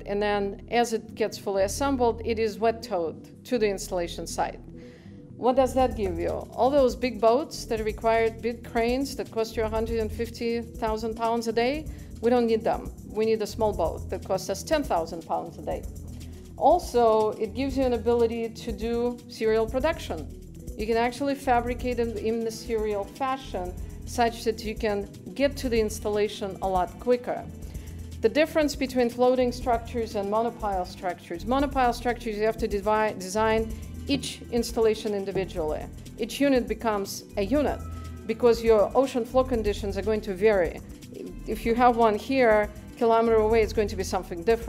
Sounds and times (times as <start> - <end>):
Speech: 0.0 - 4.6, 5.4 - 15.8, 16.6 - 27.5, 28.2 - 44.6.